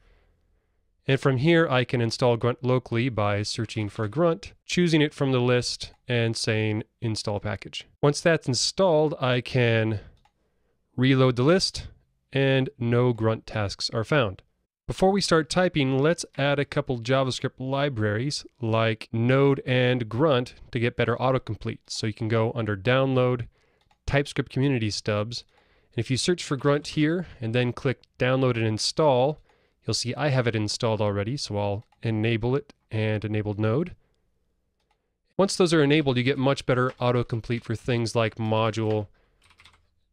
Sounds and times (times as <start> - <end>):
Speech: 1.1 - 10.1, 11.0 - 23.5, 24.1 - 34.0, 35.4 - 39.1.